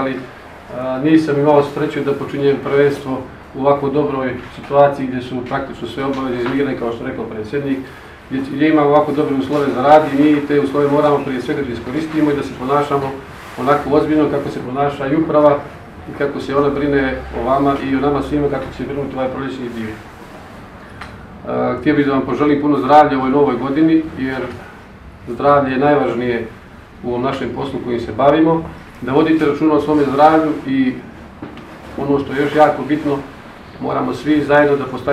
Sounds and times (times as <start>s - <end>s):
Speech: 0.0s - 20.1s, 21.4s - 31.1s, 31.8s - 35.1s.